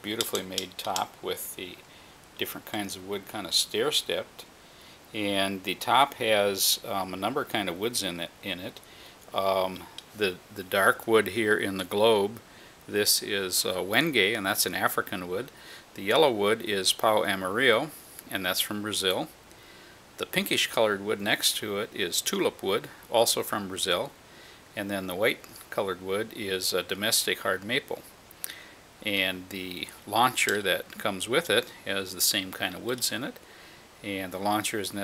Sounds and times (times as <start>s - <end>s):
Speech: 0.0s - 1.8s, 2.4s - 4.5s, 5.1s - 19.4s, 20.2s - 24.2s, 24.8s - 28.1s, 29.0s - 33.4s, 34.0s - 35.0s.